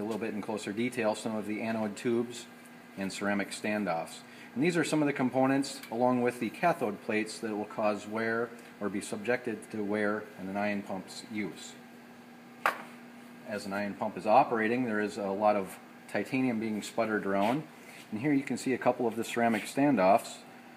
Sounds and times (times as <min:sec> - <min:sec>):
Speech: 0:00.0 - 0:11.8, 0:13.4 - 0:20.5.